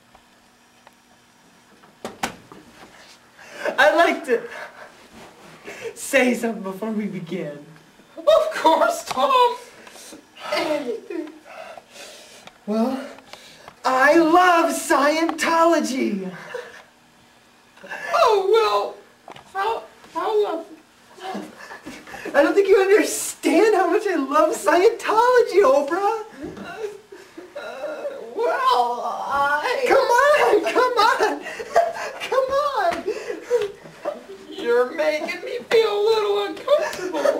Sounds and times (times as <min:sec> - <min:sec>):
Speech: 0:03.7 - 0:04.5, 0:06.0 - 0:09.7, 0:13.8 - 0:16.4, 0:19.6 - 0:21.5, 0:22.3 - 0:26.4, 0:27.6 - 0:31.4, 0:32.2 - 0:33.1, 0:34.1 - 0:37.3.